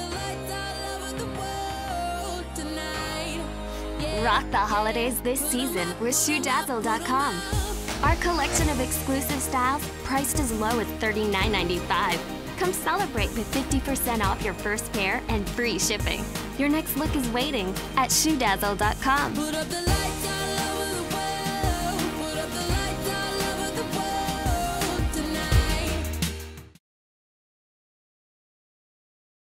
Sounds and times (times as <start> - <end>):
Music: 0.0 - 26.8.